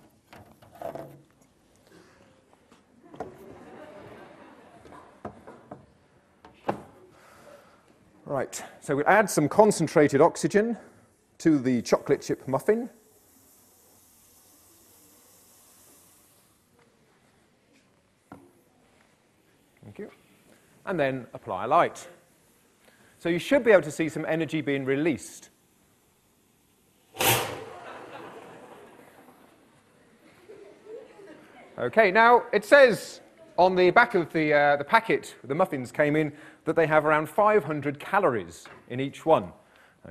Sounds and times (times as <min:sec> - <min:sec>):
Speech: 0:08.2 - 0:13.0, 0:20.9 - 0:22.2, 0:23.2 - 0:25.5, 0:31.8 - 0:40.1.